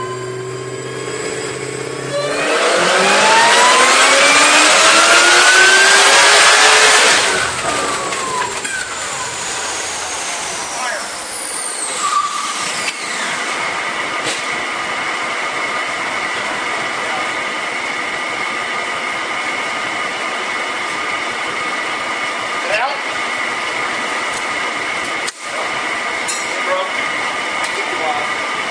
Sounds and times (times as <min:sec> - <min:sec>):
Car: 0:00.0 - 0:28.7
Medium engine (mid frequency): 0:00.0 - 0:28.7
Speech: 0:10.8 - 0:11.1, 0:22.6 - 0:23.1, 0:27.7 - 0:28.4.